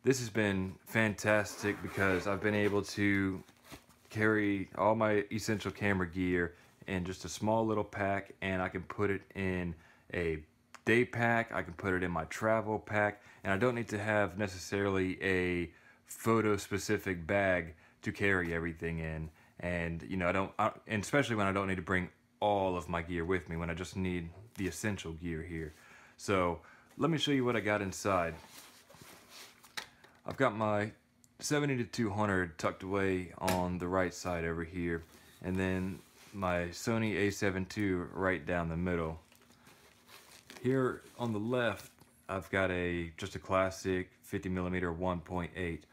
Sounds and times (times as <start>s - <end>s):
Speech: 0.0s - 3.5s, 4.1s - 28.5s, 30.2s - 39.2s, 40.6s - 45.9s.